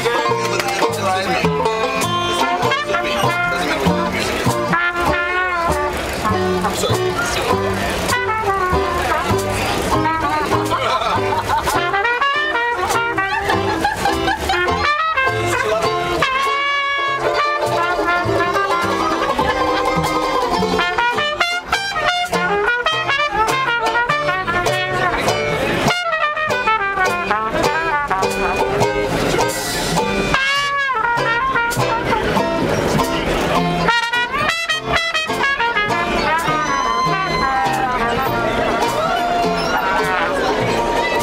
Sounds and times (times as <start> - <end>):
Jazz: 0.0 - 41.2.